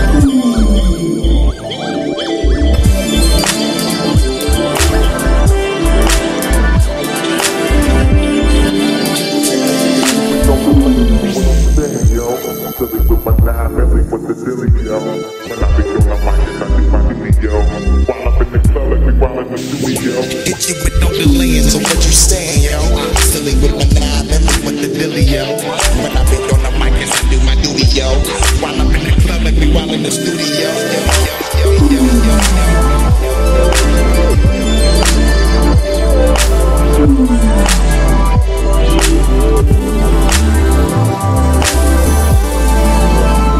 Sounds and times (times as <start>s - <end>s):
Hip hop music: 0.0s - 43.5s.